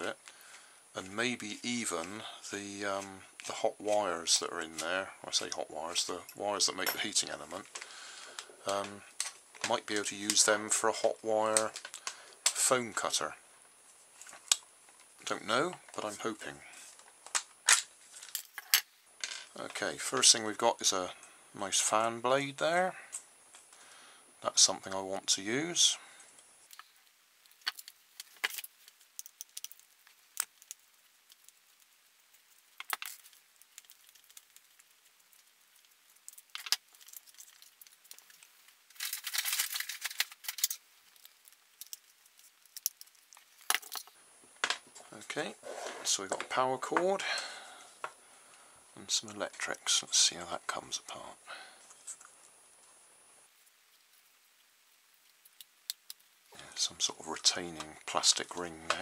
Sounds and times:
Speech: 0.0s - 0.2s, 1.0s - 7.7s, 8.6s - 11.8s, 12.5s - 13.4s, 15.2s - 16.8s, 19.6s - 23.1s, 24.4s - 26.0s, 45.1s - 47.4s, 49.0s - 51.4s, 56.6s - 59.0s.

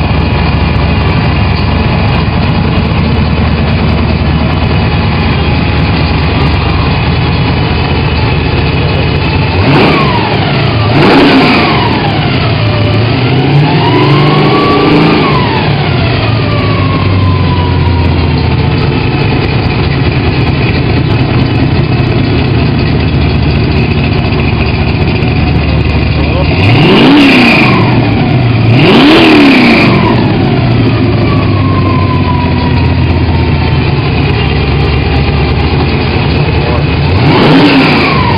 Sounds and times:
Heavy engine (low frequency): 0.0s - 38.3s
Idling: 0.0s - 38.3s
Accelerating, revving, vroom: 9.6s - 16.8s, 26.4s - 30.7s, 37.1s - 38.3s.

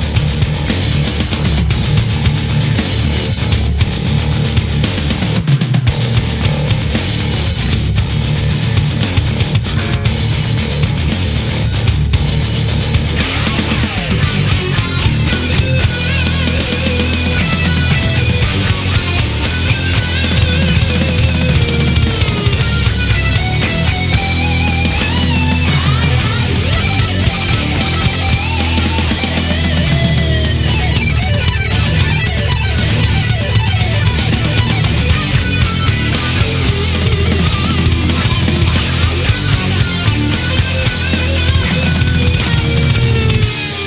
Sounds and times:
Music: 0.0s - 43.8s.

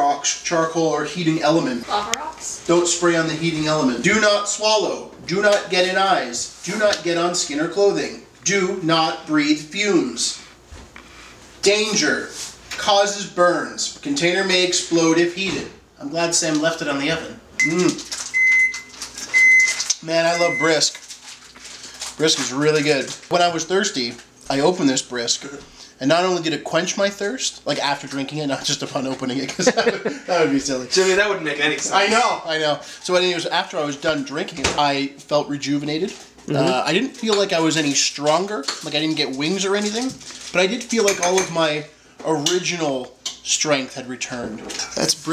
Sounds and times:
Speech: 0.0s - 10.4s, 11.6s - 18.0s, 22.2s - 29.7s, 30.3s - 45.3s.

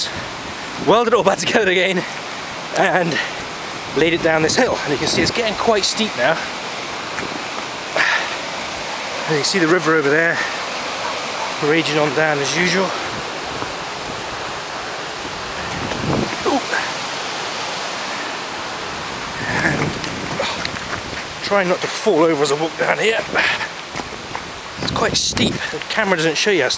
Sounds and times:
Waterfall: 0.0s - 26.7s.

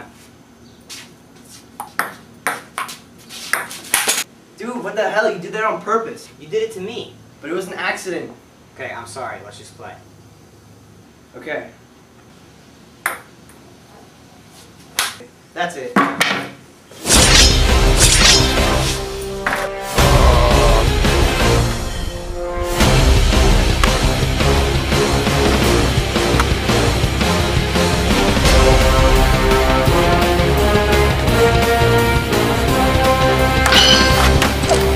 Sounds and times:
Speech: 4.6s - 10.1s, 11.3s - 11.8s, 15.6s - 16.0s.

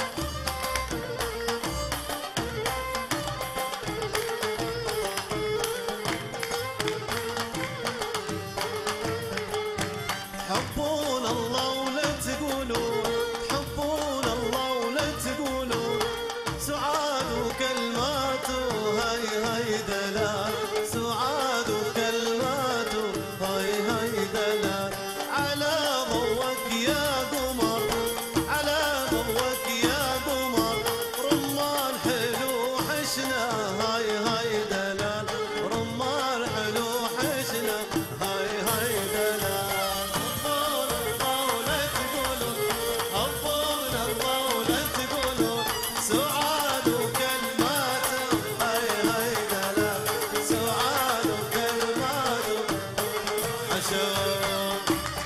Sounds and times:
Middle Eastern music: 0.0s - 55.2s
Traditional music: 0.0s - 55.2s.

